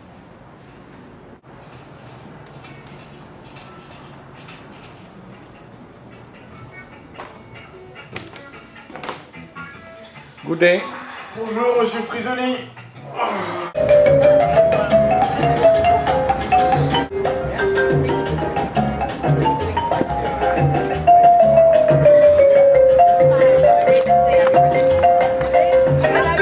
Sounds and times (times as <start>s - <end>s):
Music: 1.4s - 26.4s.